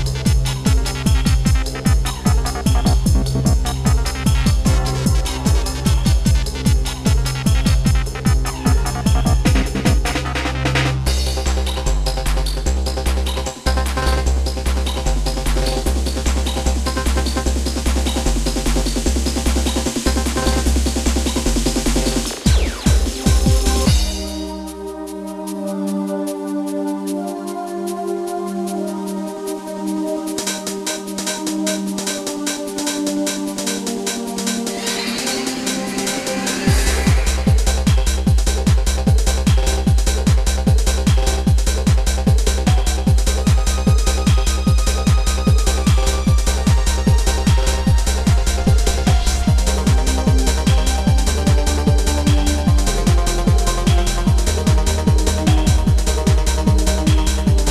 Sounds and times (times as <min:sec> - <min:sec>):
Trance music: 0:00.0 - 0:57.7.